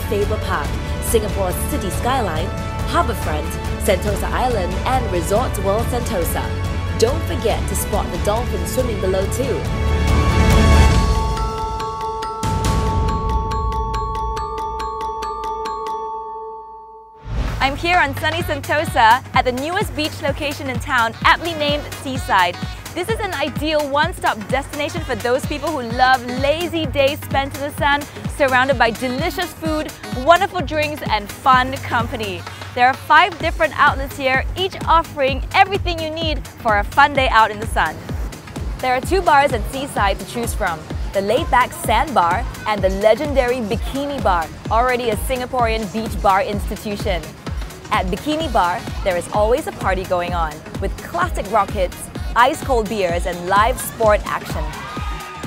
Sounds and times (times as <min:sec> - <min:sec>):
Speech: 0:00.0 - 0:09.7, 0:17.6 - 0:38.0, 0:38.8 - 0:47.3, 0:47.9 - 0:54.7
Music: 0:00.0 - 0:55.4.